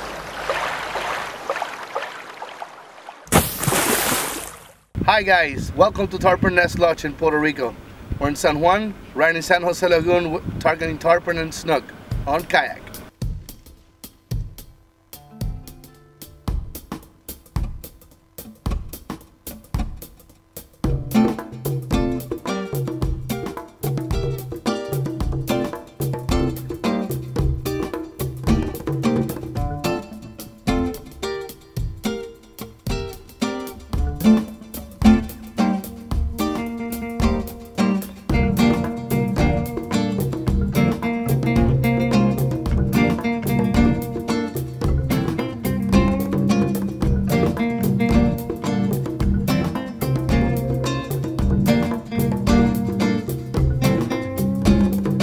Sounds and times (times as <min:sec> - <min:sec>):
Music: 0:12.1 - 0:55.2.